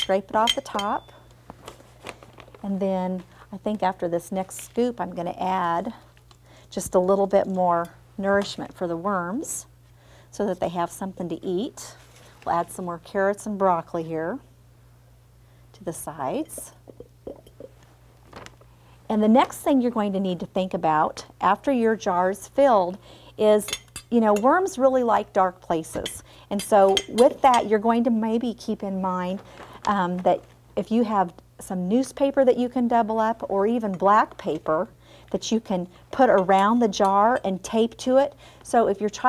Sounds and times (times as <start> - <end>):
Speech: 2.6 - 6.0, 6.8 - 9.7, 10.4 - 14.4, 15.8 - 16.8, 19.1 - 39.2.